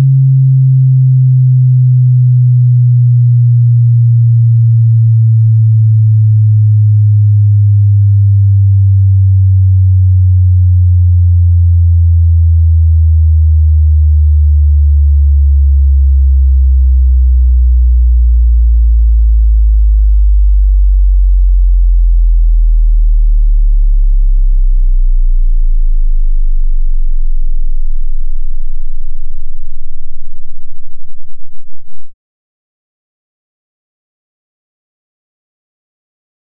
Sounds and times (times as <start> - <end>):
Sine wave: 0.0 - 32.2.